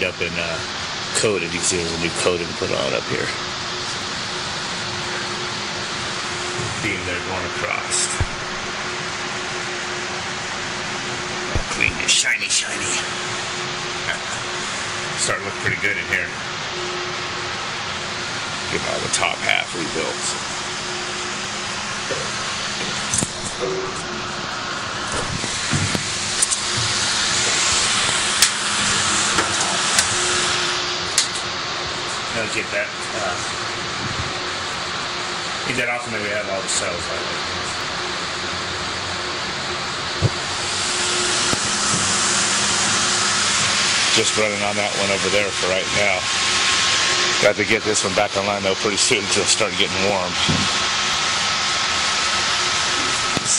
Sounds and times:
Mechanical fan: 0.0 - 53.5.

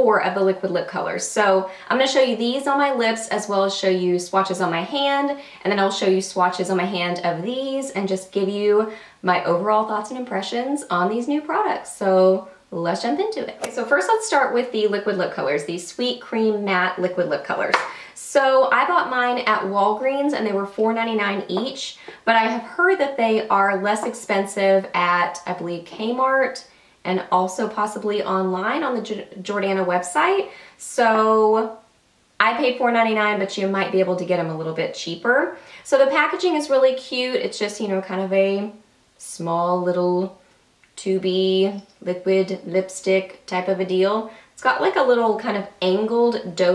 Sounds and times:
Speech: 0.0 - 31.8, 32.4 - 40.4, 41.0 - 46.7.

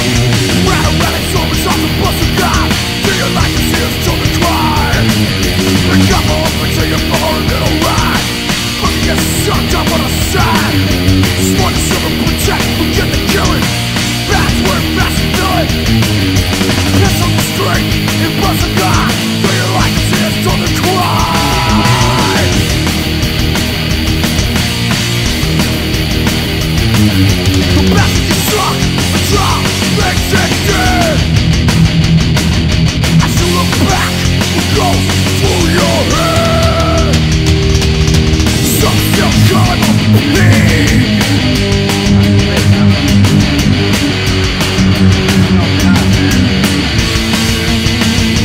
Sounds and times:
Music: 0.0 - 48.4.

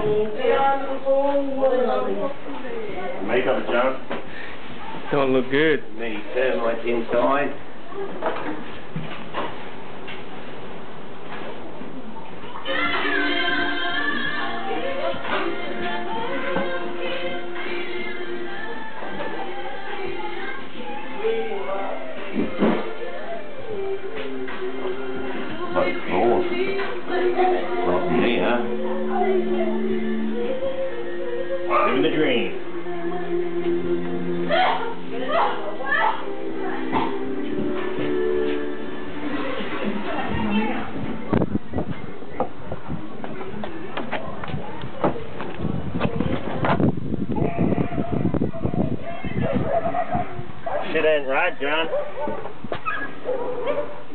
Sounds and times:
Music: 12.6 - 42.4.

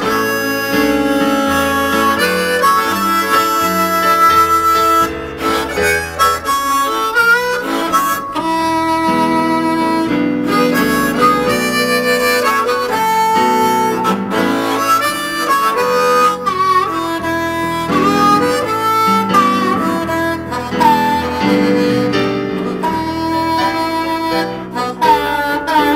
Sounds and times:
Blues: 0.0 - 25.9
Harmonica: 0.0 - 25.9.

